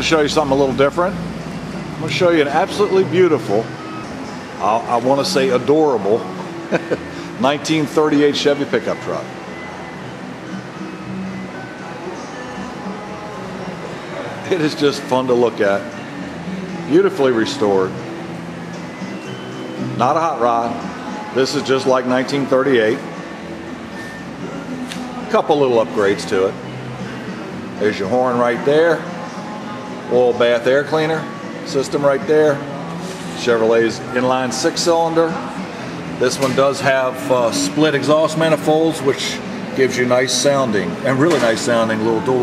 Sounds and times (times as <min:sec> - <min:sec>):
Speech: 0:00.0 - 0:01.2, 0:02.0 - 0:03.7, 0:04.6 - 0:06.3, 0:07.4 - 0:09.3, 0:14.5 - 0:15.9, 0:16.9 - 0:18.0, 0:20.0 - 0:20.8, 0:21.4 - 0:23.0, 0:25.3 - 0:26.6, 0:27.8 - 0:29.0, 0:30.1 - 0:32.6, 0:33.4 - 0:35.4, 0:36.2 - 0:42.4
Music: 0:00.0 - 0:42.4.